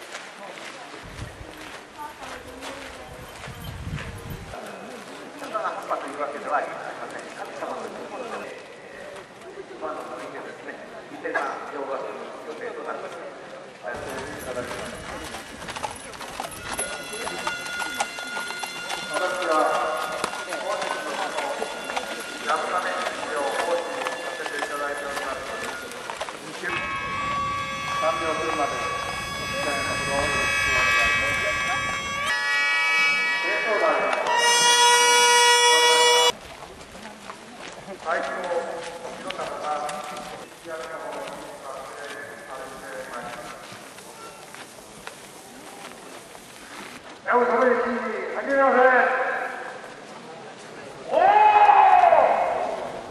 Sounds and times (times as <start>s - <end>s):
Outside, rural or natural: 0.0s - 53.1s
Speech: 0.3s - 3.6s, 19.1s - 26.8s, 37.0s - 44.3s, 47.3s - 51.4s.